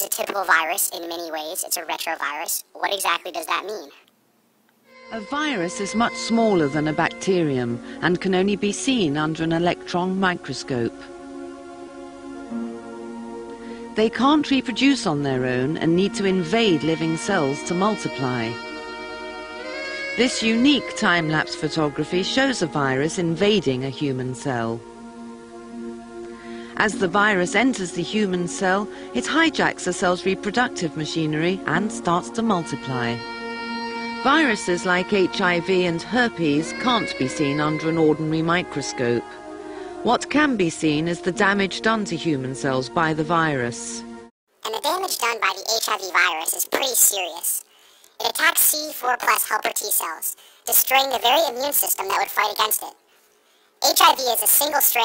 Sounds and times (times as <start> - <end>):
Speech: 0.0 - 4.0, 5.2 - 11.1, 14.0 - 18.6, 20.2 - 24.8, 26.8 - 33.2, 34.3 - 39.4, 40.0 - 44.0, 44.6 - 47.6, 48.2 - 53.0, 53.8 - 55.0
Music: 4.9 - 44.3.